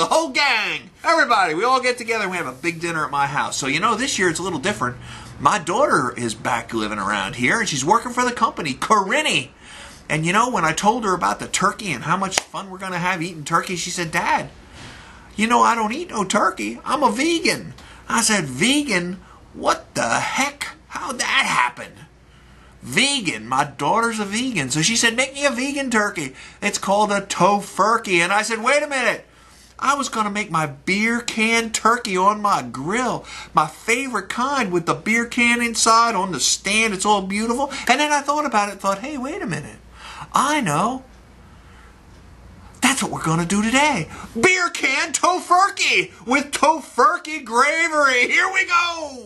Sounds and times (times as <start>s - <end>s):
Speech: 0.0s - 9.5s, 10.1s - 14.5s, 15.4s - 22.1s, 22.8s - 41.1s, 42.8s - 49.2s.